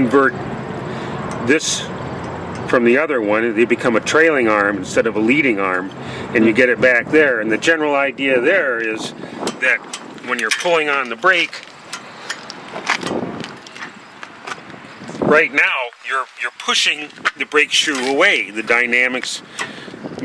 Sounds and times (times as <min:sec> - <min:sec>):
Speech: 0:00.0 - 0:00.4, 0:01.4 - 0:01.9, 0:02.7 - 0:11.6, 0:15.2 - 0:19.4.